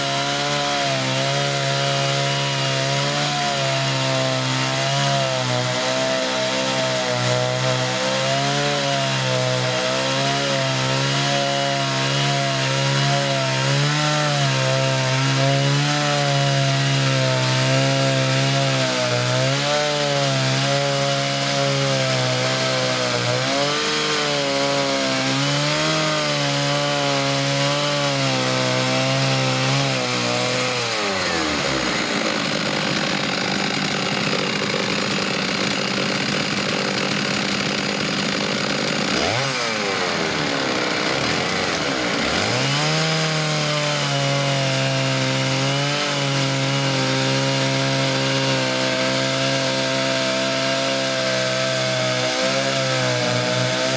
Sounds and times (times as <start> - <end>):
Power tool: 0.0 - 53.9
Sawing: 0.0 - 53.9
Wood: 0.0 - 53.9.